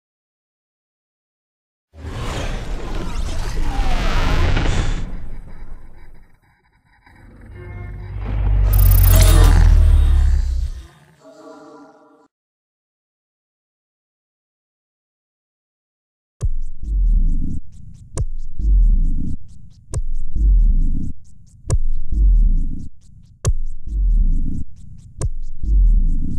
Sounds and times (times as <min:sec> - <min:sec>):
Music: 0:07.2 - 0:12.3, 0:16.4 - 0:26.3.